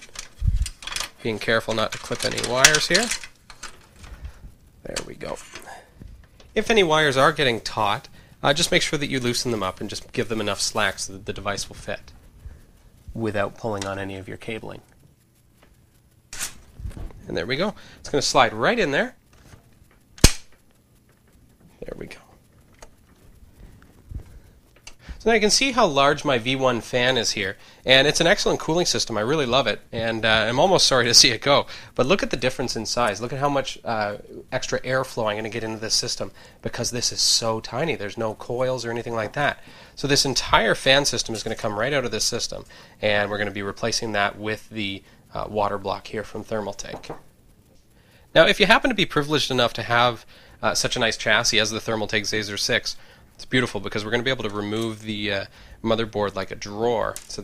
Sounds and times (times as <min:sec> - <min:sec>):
Speech: 0:01.2 - 0:03.2, 0:04.8 - 0:05.8, 0:06.6 - 0:12.1, 0:13.1 - 0:14.9, 0:17.2 - 0:19.2, 0:21.7 - 0:22.4, 0:25.2 - 0:47.1, 0:48.3 - 0:57.4.